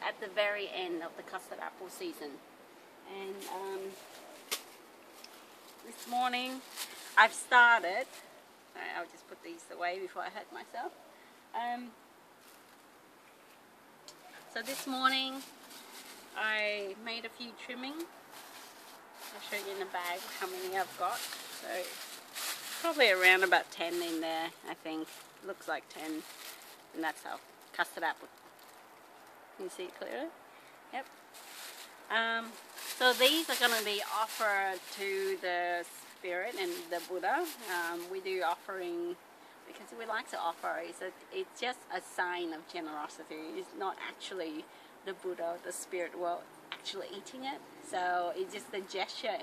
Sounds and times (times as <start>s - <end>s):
Speech: 0.0s - 2.4s, 3.1s - 4.0s, 5.9s - 6.6s, 7.2s - 8.2s, 8.8s - 10.9s, 11.6s - 12.0s, 14.6s - 15.5s, 16.4s - 18.1s, 19.3s - 22.0s, 22.8s - 26.3s, 27.0s - 28.3s, 29.6s - 30.3s, 32.1s - 49.4s.